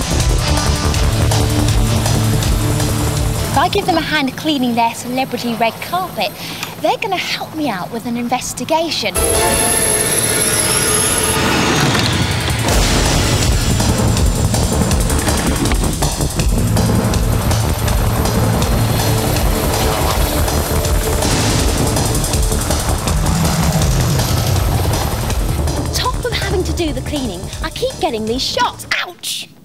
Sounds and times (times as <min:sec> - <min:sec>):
Helicopter: 0:00.0 - 0:28.4
Music: 0:00.0 - 0:29.5
Speech: 0:03.6 - 0:09.2, 0:25.9 - 0:29.5.